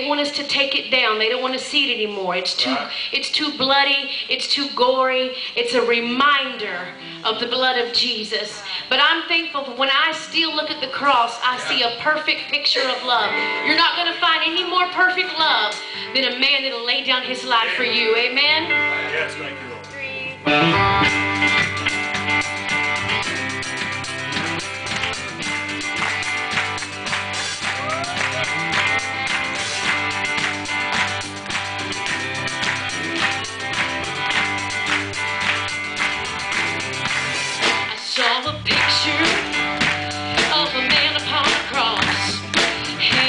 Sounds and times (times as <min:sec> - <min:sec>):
Speech: 0:00.0 - 0:20.4
Music: 0:00.0 - 0:43.2.